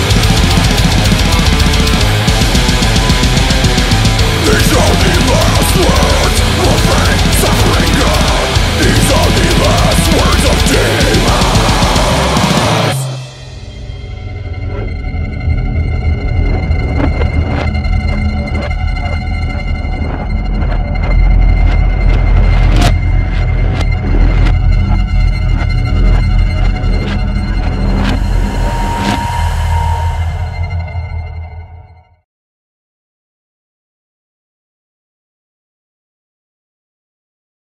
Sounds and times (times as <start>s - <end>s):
Music: 0.0s - 32.3s.